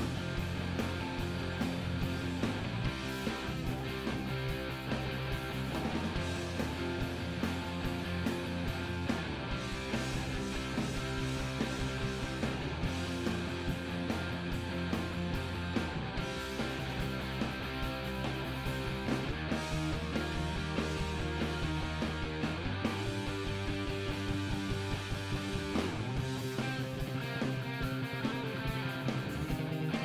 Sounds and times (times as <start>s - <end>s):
Guitar: 0.0s - 30.0s.